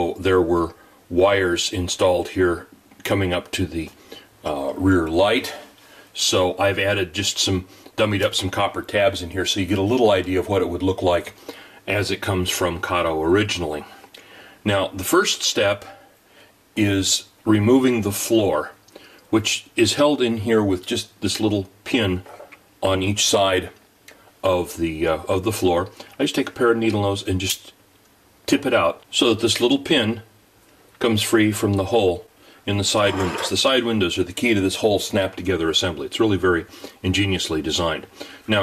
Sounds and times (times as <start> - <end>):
Speech: 0.0 - 16.0, 16.8 - 23.8, 24.4 - 27.8, 28.5 - 30.4, 31.0 - 38.6.